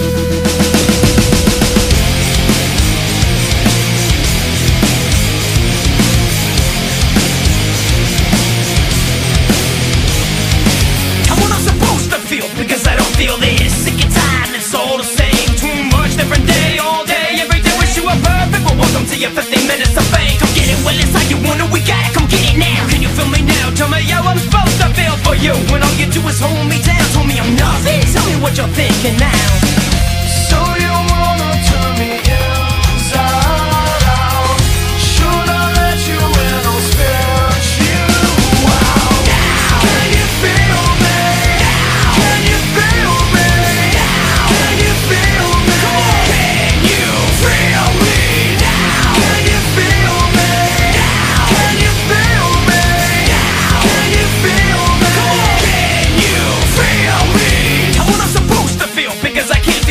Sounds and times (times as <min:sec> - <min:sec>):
Music: 0:00.0 - 0:59.9.